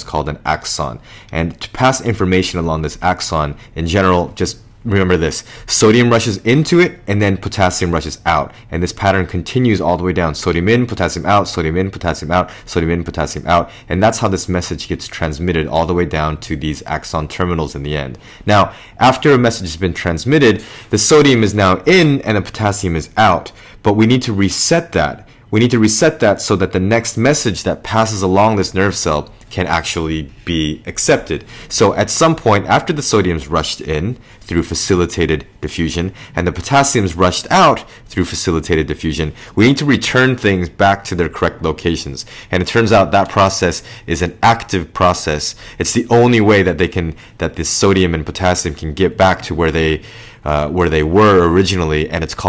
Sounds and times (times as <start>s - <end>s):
Speech: 0.0s - 52.4s.